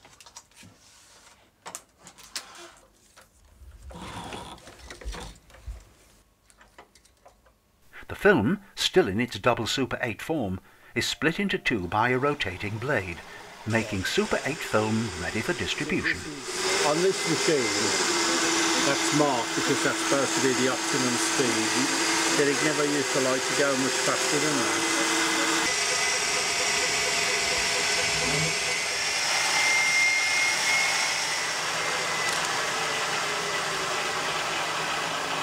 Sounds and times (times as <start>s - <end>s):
Speech: 8.0s - 18.0s, 18.8s - 24.8s.